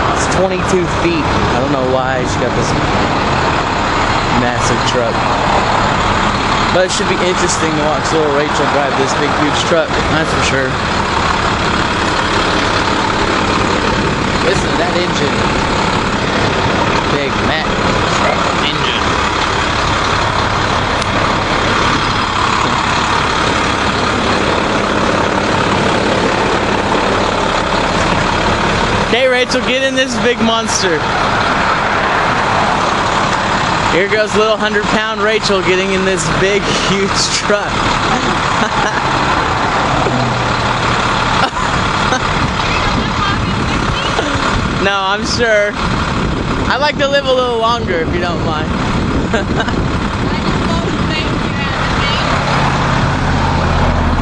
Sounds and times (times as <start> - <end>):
Truck: 0.0 - 54.2
Speech: 0.2 - 2.8, 4.3 - 5.2, 6.7 - 10.8, 14.4 - 15.4, 17.1 - 19.1, 29.1 - 31.0, 33.9 - 38.4, 42.7 - 45.8, 46.7 - 48.7, 50.3 - 52.3.